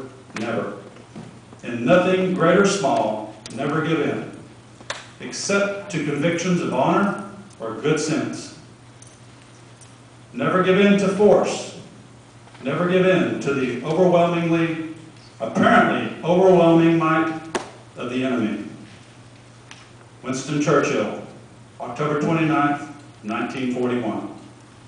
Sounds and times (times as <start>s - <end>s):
Male speech, man speaking: 0.0s - 0.8s, 1.6s - 4.3s, 5.2s - 8.6s, 10.4s - 11.8s, 12.6s - 17.4s, 18.0s - 18.8s, 20.3s - 24.4s
Narration, monologue: 0.0s - 24.8s.